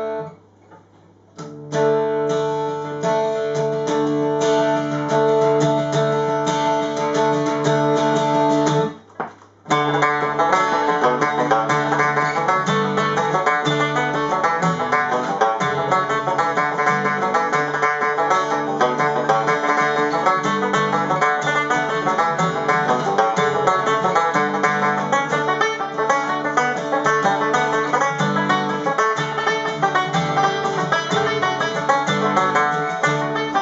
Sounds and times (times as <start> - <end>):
Music: 0.0 - 0.4, 1.4 - 9.1, 9.7 - 33.6.